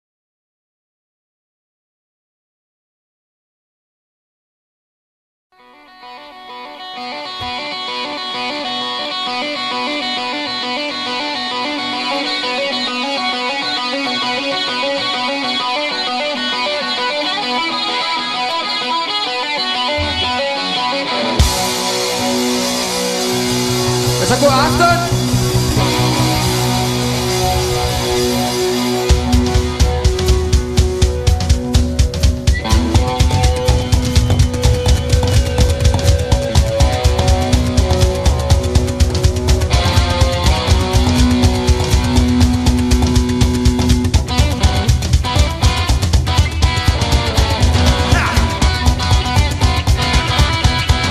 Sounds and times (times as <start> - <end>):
Music: 5.5 - 51.1.